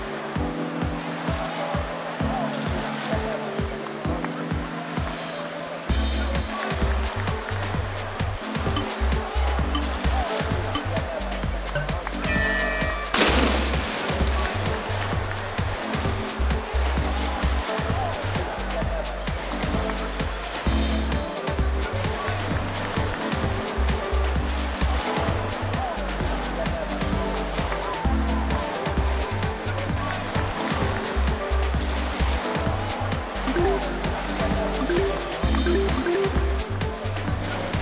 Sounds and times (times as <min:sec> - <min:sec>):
Music: 0:00.0 - 0:37.8
Water: 0:00.0 - 0:37.8.